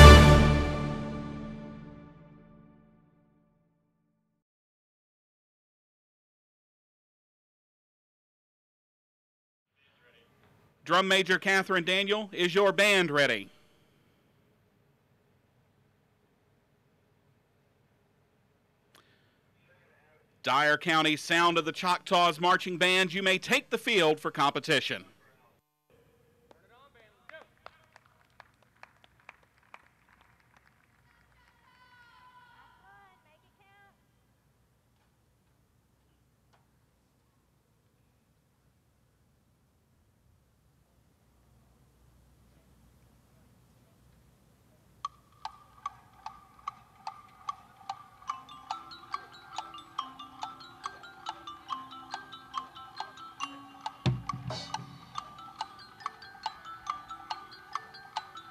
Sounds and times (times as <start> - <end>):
Speech: 9.8 - 13.6, 19.6 - 27.9.